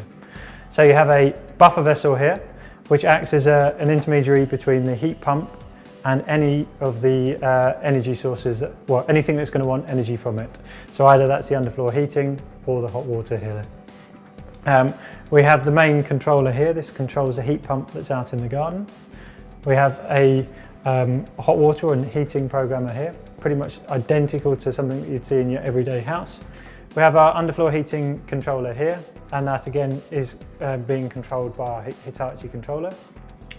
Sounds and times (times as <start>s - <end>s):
Music: 0.0s - 33.5s
Speech: 0.7s - 13.7s, 14.6s - 18.9s, 19.6s - 33.0s.